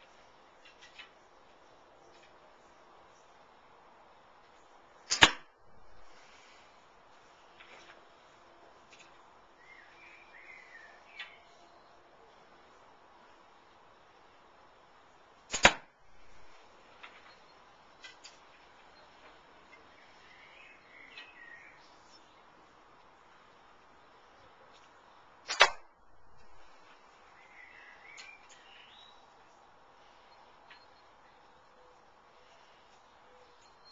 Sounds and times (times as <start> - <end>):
Arrow: 5.1 - 5.5, 15.5 - 15.9, 25.4 - 25.9.